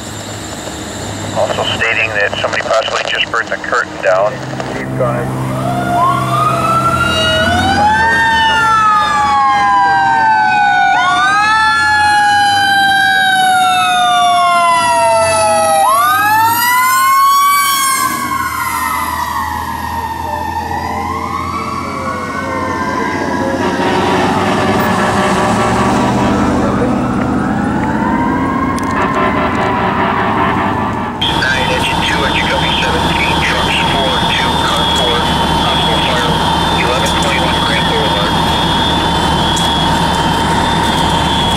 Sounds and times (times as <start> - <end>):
Truck: 0.0 - 17.4, 18.0 - 41.5
Fire engine, fire truck (siren): 0.0 - 41.5.